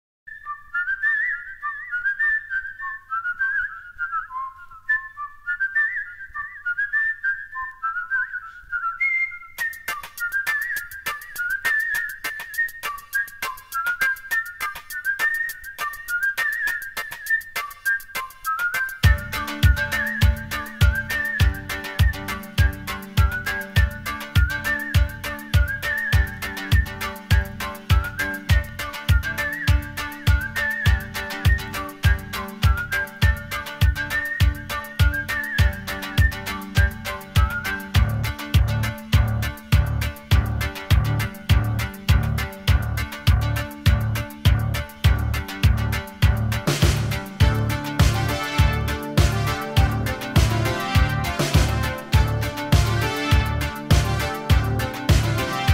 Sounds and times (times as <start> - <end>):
Whistle: 0.3 - 55.7.